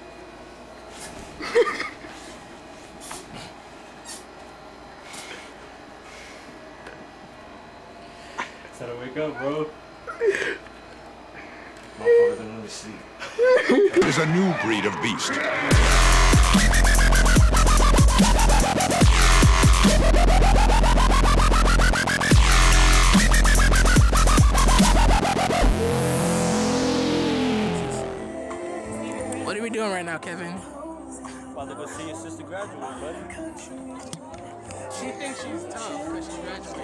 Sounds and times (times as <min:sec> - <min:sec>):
Dubstep: 0:15.7 - 0:28.3.